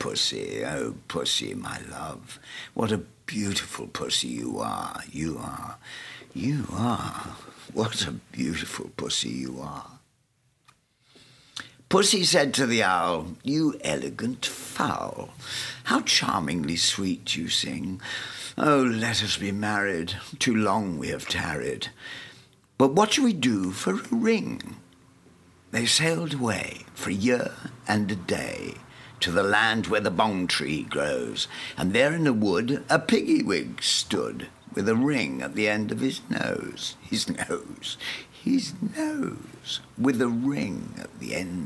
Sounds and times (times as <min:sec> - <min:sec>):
Speech: 0:00.0 - 0:05.8, 0:06.4 - 0:10.0, 0:11.9 - 0:22.0, 0:22.8 - 0:24.8, 0:25.7 - 0:41.6.